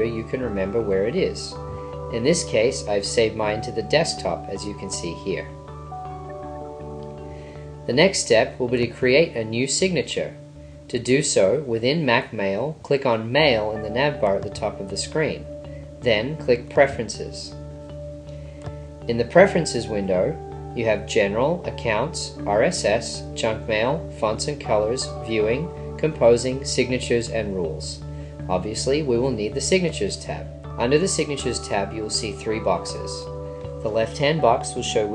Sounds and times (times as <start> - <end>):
Speech: 0.0 - 5.6, 7.9 - 17.6, 19.1 - 35.1
Music: 0.0 - 35.1.